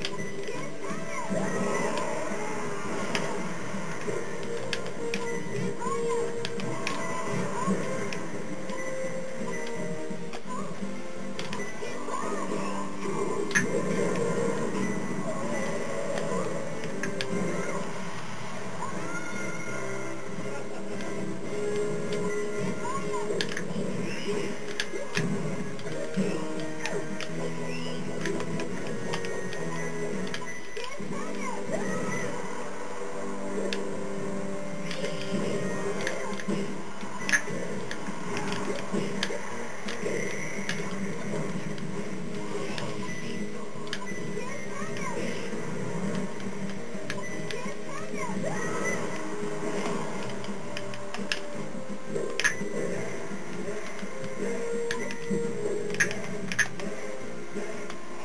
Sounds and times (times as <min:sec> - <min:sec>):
Television: 0:00.0 - 0:58.2.